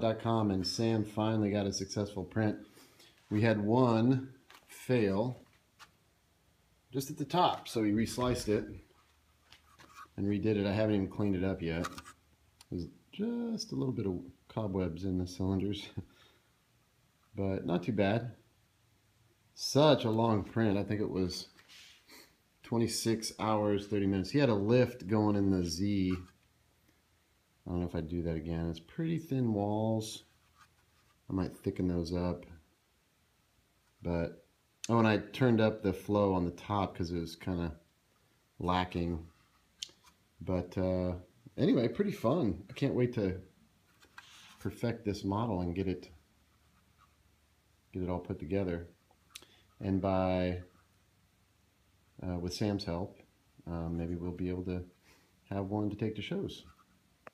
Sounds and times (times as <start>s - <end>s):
Speech: 0.0s - 2.6s, 3.3s - 5.5s, 6.9s - 8.9s, 10.2s - 12.0s, 12.6s - 16.1s, 17.3s - 18.4s, 19.6s - 21.6s, 22.6s - 26.4s, 27.6s - 30.3s, 31.3s - 32.6s, 34.0s - 37.9s, 38.6s - 39.4s, 40.4s - 43.5s, 44.6s - 46.2s, 47.9s - 49.0s, 49.8s - 50.8s, 52.2s - 56.8s.